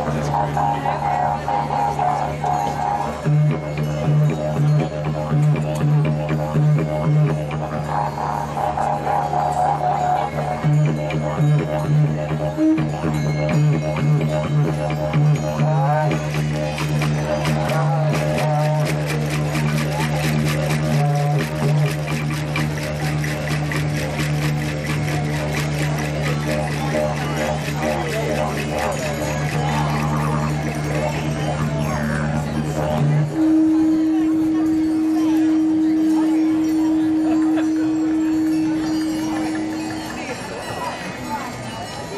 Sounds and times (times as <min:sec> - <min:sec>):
Speech: 0:00.0 - 0:03.3, 0:25.0 - 0:42.1
Didgeridoo: 0:00.0 - 0:42.0.